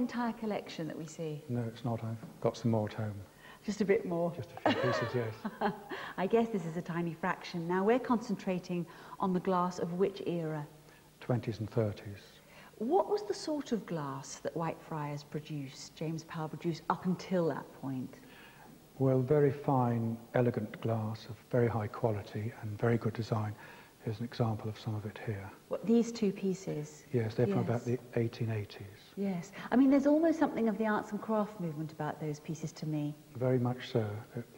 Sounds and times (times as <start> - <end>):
Female speech, woman speaking: 0.0 - 1.4, 3.6 - 10.7, 12.8 - 18.2, 25.7 - 27.9, 29.2 - 33.2.